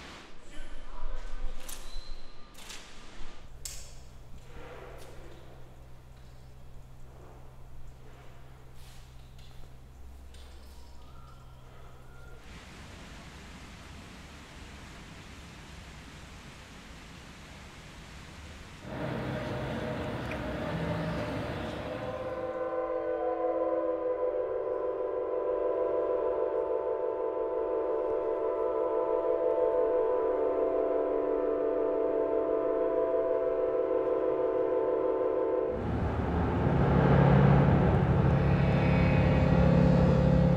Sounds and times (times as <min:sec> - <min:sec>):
Inside, large room or hall: 0:00.0 - 0:12.5, 0:18.8 - 0:22.6.